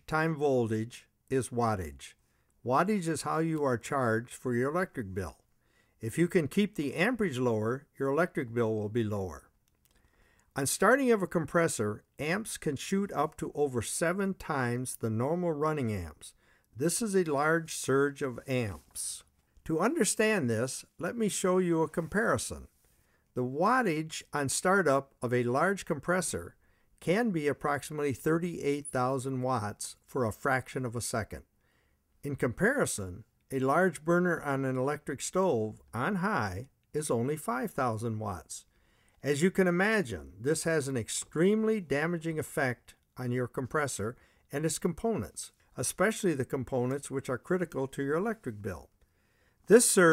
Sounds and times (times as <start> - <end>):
Speech: 0.0 - 9.5, 10.6 - 22.7, 23.4 - 31.5, 32.2 - 49.0, 49.7 - 50.1.